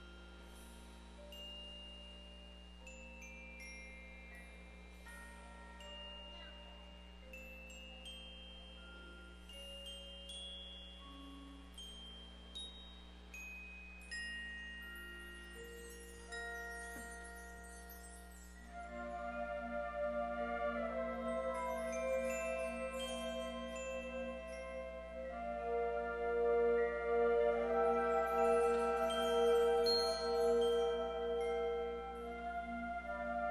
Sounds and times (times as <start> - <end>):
Music: 0.0 - 33.5.